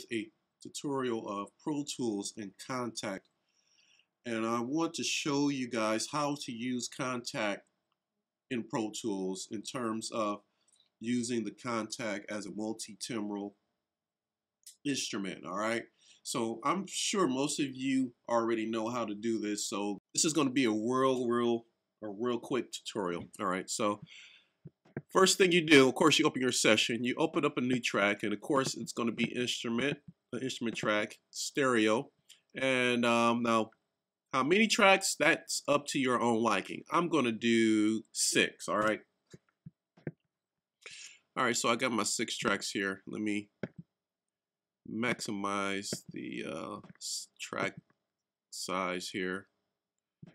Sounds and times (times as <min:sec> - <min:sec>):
Speech: 0:00.0 - 0:03.2, 0:04.3 - 0:07.6, 0:08.5 - 0:10.4, 0:11.0 - 0:13.6, 0:14.7 - 0:24.1, 0:25.1 - 0:33.7, 0:34.4 - 0:39.0, 0:40.9 - 0:43.6, 0:44.9 - 0:47.8, 0:48.6 - 0:49.5.